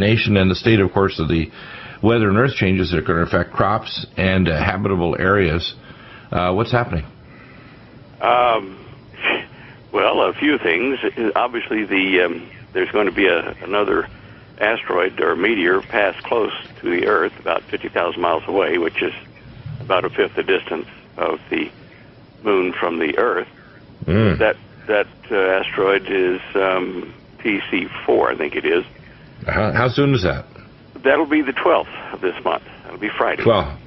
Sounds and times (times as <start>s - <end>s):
Speech: 0.0s - 7.1s, 8.2s - 19.3s, 19.9s - 21.7s, 22.4s - 33.8s.